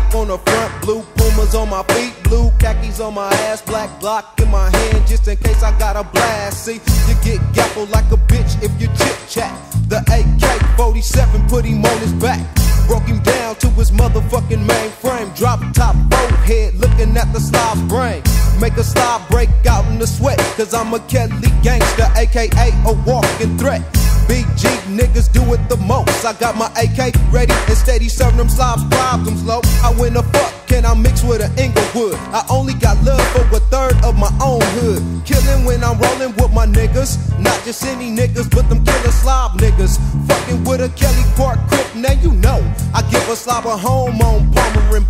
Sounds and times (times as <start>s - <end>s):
Music: 0.0s - 45.1s.